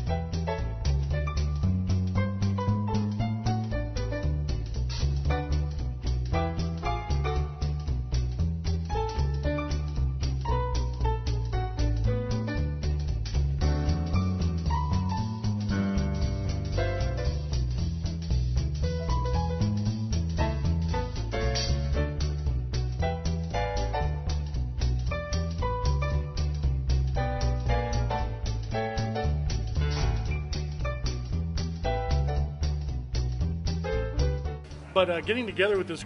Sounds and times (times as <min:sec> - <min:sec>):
Music: 0:00.0 - 0:36.0.